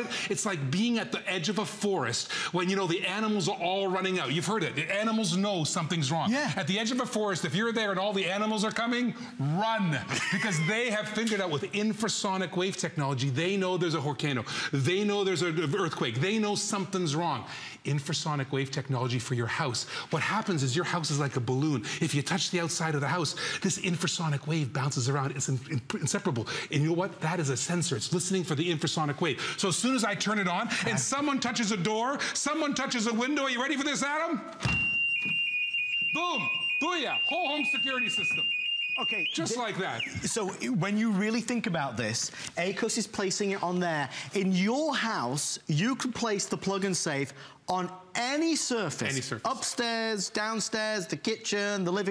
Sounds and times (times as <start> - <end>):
Speech: 0.0 - 34.5, 36.2 - 52.1
Alarm: 34.6 - 40.5.